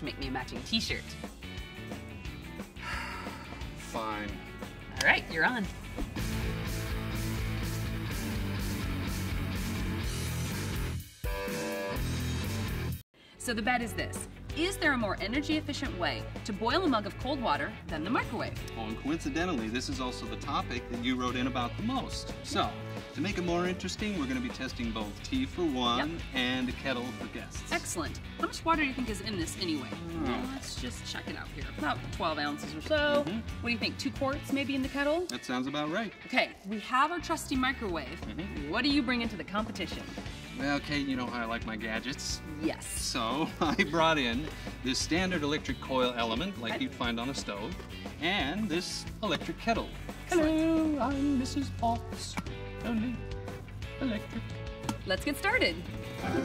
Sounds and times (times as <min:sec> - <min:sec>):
Music: 0:00.0 - 0:56.4.